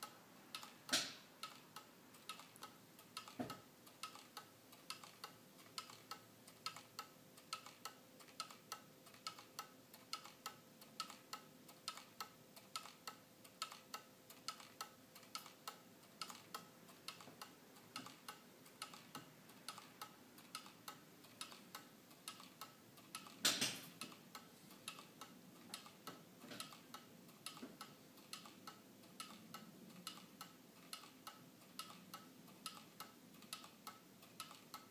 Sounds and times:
Tick-tock: 0.0s - 34.9s.

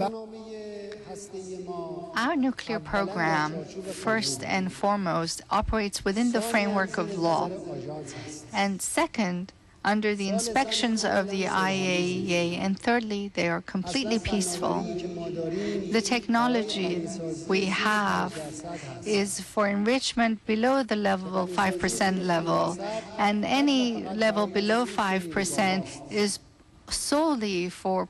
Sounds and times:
Male speech, man speaking: 0.0s - 5.2s, 6.0s - 8.6s, 9.9s - 12.8s, 13.4s - 19.4s, 21.0s - 26.4s
Female speech, woman speaking: 2.2s - 7.7s, 8.5s - 15.0s, 15.8s - 28.1s.

